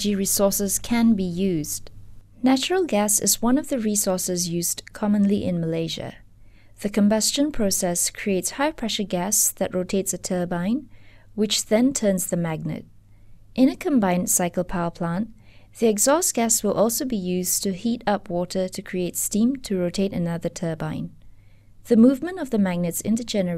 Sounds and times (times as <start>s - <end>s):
Speech: 0.0s - 6.2s, 6.8s - 12.9s, 13.6s - 21.2s, 21.9s - 23.5s.